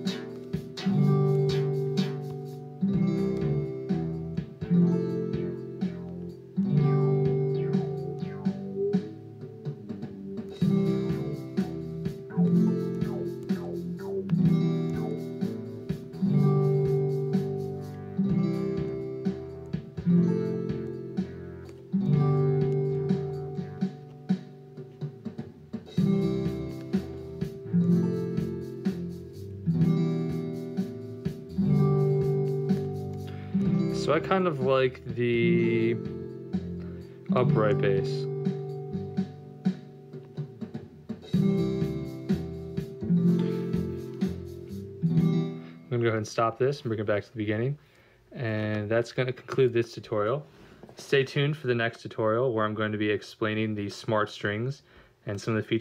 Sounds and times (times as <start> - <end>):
Electronic tuner: 0.0 - 46.0
Guitar: 0.0 - 54.7.